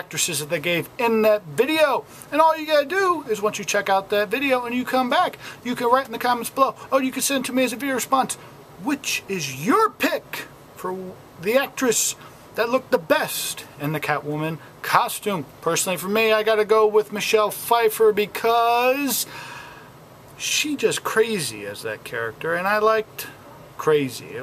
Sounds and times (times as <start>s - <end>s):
Speech: 0.0s - 19.3s, 20.4s - 24.4s.